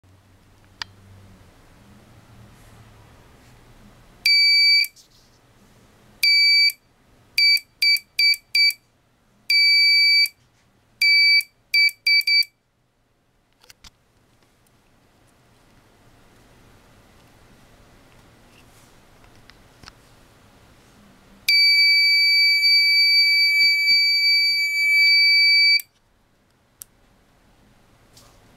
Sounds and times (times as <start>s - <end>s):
Inside, small room: 0.1s - 28.5s
Buzzer: 4.3s - 4.9s, 6.2s - 6.8s, 7.4s - 8.8s, 9.5s - 10.3s, 11.0s - 12.5s, 21.5s - 25.8s.